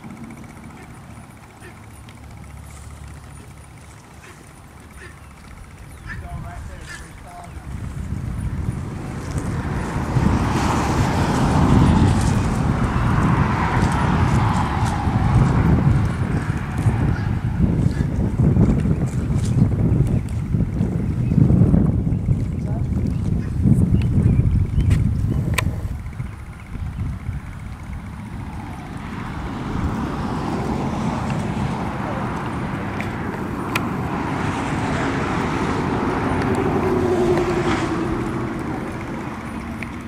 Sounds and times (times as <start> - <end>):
Clip-clop: 0.0 - 40.0.